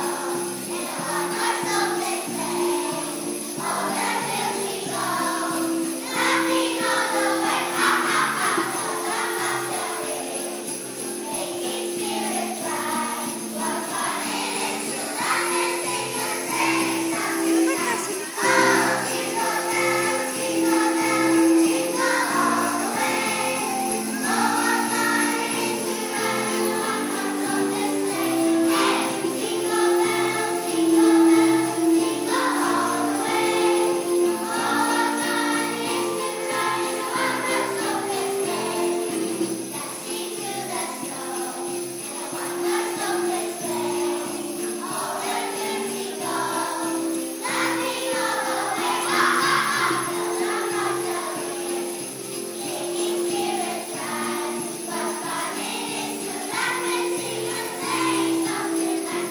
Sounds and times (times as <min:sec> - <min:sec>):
Jingle, tinkle: 0:00.0 - 0:59.3.